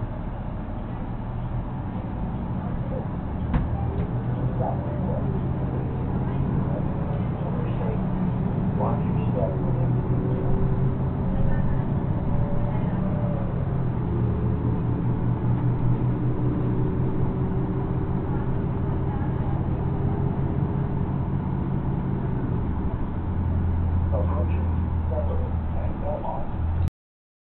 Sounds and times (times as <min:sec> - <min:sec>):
Speech: 0:02.6 - 0:13.6, 0:24.1 - 0:26.6.